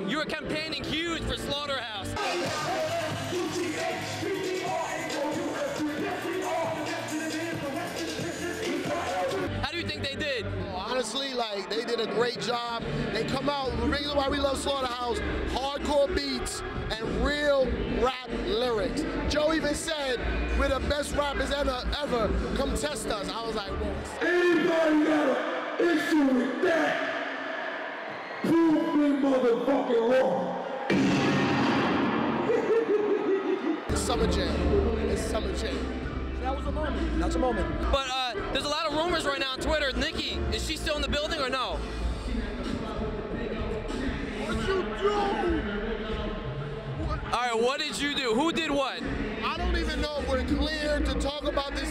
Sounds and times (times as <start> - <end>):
Speech: 0.0 - 2.4, 9.6 - 27.0, 36.4 - 41.8, 47.1 - 51.9
Music: 0.0 - 29.9, 30.7 - 51.9.